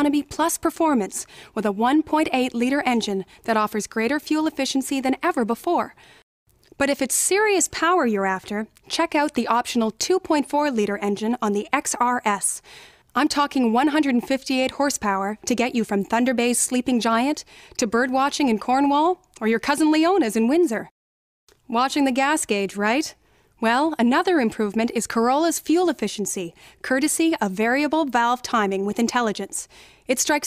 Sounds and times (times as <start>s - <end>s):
Speech: 0.0s - 6.0s, 6.8s - 12.6s, 13.2s - 20.9s, 21.7s - 30.4s.